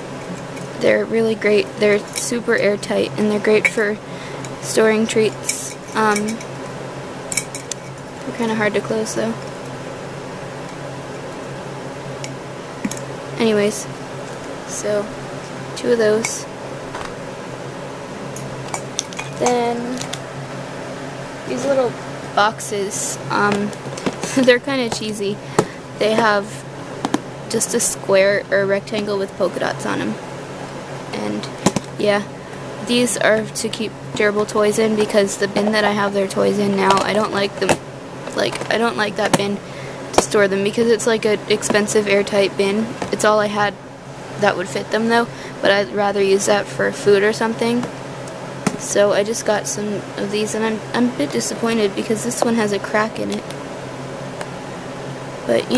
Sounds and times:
Speech: 0.8s - 6.4s, 8.3s - 9.4s, 13.4s - 13.9s, 14.7s - 15.1s, 15.8s - 16.5s, 19.4s - 20.0s, 21.5s - 25.4s, 26.0s - 26.6s, 27.5s - 30.2s, 31.2s - 39.6s, 40.2s - 43.8s, 44.4s - 47.9s, 48.8s - 53.4s, 55.5s - 55.7s.

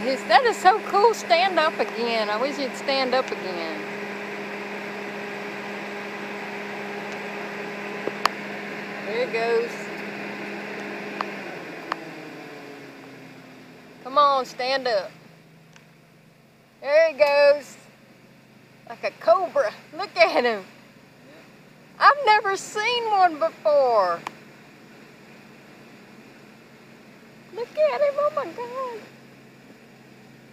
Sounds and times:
Speech: 0.0s - 3.9s, 9.1s - 9.9s, 14.0s - 15.2s, 16.8s - 17.8s, 18.9s - 20.7s, 22.0s - 24.2s, 27.5s - 29.1s
Outside, rural or natural: 0.0s - 30.5s.

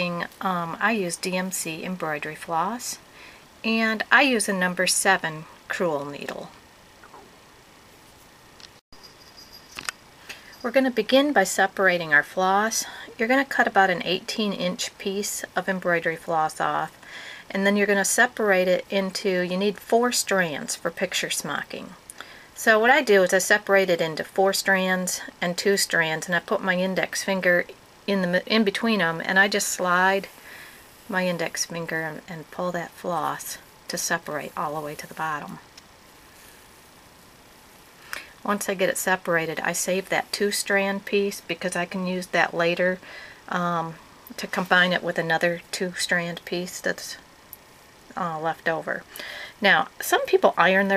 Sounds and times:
Speech: 0.0s - 3.0s, 3.6s - 6.6s, 10.6s - 22.0s, 22.6s - 30.3s, 31.1s - 35.7s, 38.4s - 47.2s, 48.1s - 50.9s
Inside, small room: 0.0s - 50.9s.

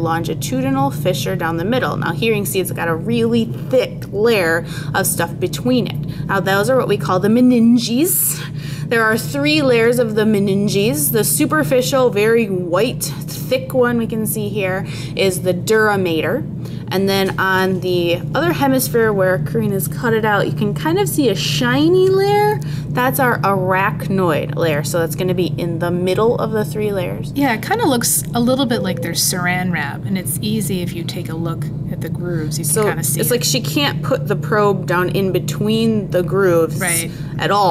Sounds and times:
Speech: 0.0s - 37.7s.

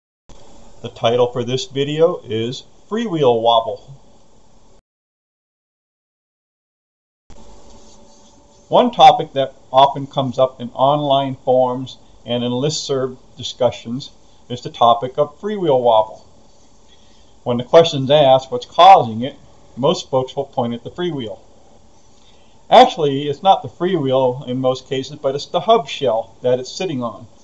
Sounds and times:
Speech: 0.8s - 4.0s, 8.7s - 16.3s, 17.5s - 21.4s, 22.7s - 27.3s.

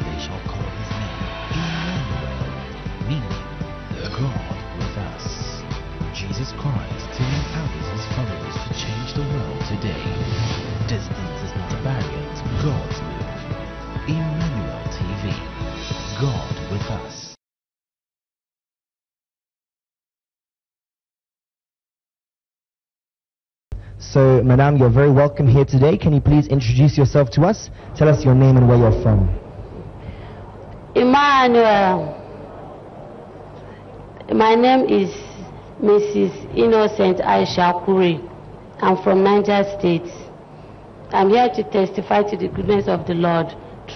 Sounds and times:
Speech: 24.0s - 29.4s.

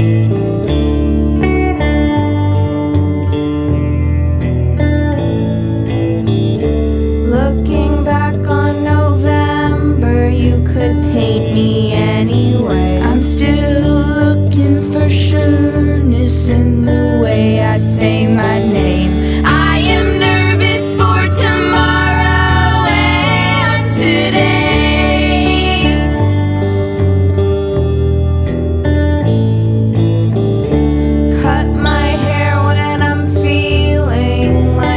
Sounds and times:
Music: 0.0s - 34.9s.

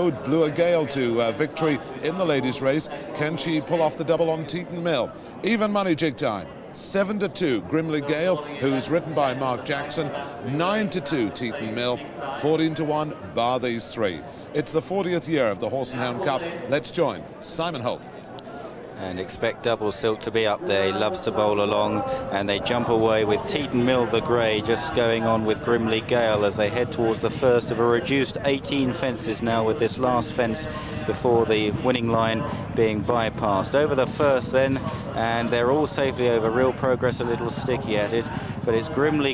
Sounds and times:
Speech: 0.0s - 18.1s, 19.0s - 39.3s.

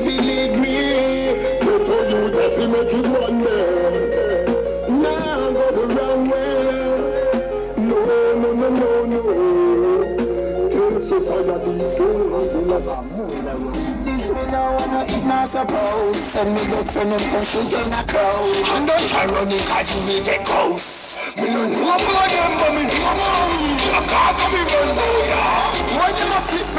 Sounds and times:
Music: 0.0s - 26.7s.

